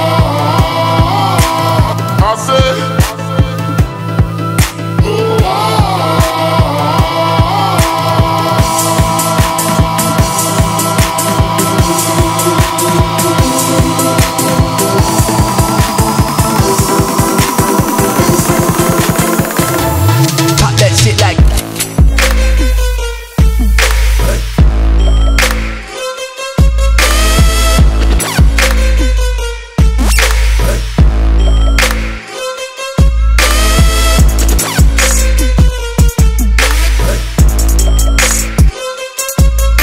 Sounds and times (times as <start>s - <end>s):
Music: 0.0s - 39.8s.